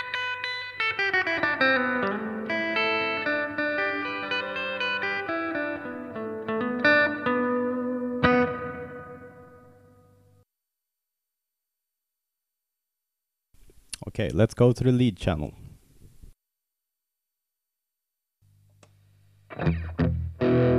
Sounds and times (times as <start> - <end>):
Electric guitar: 0.0 - 10.2, 19.5 - 20.7
Distortion: 0.0 - 10.4, 13.6 - 16.4, 18.4 - 20.7.